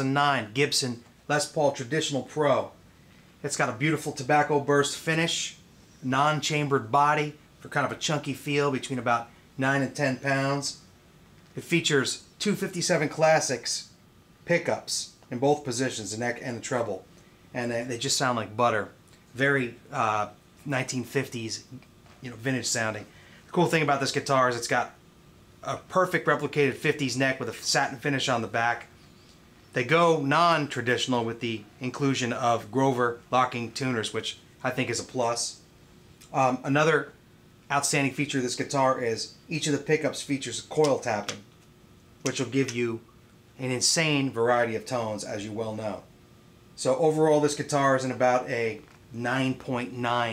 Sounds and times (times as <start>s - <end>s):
Speech: 0.0s - 2.8s, 3.4s - 10.9s, 11.6s - 25.0s, 25.6s - 29.0s, 29.7s - 41.5s, 42.2s - 46.1s, 46.8s - 50.3s.